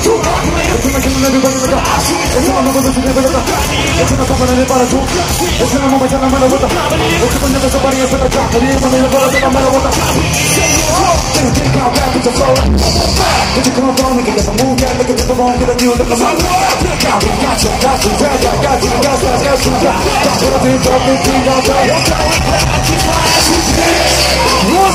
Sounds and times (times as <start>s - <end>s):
Music: 0.0s - 24.9s.